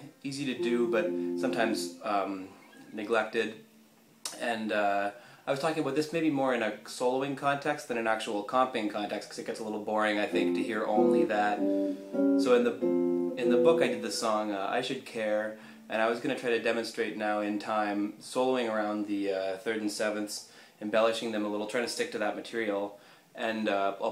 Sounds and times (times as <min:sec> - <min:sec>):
Speech: 0:00.0 - 0:03.6, 0:04.3 - 0:11.6, 0:12.4 - 0:12.8, 0:13.4 - 0:24.1
Guitar: 0:00.5 - 0:03.0, 0:10.3 - 0:14.6.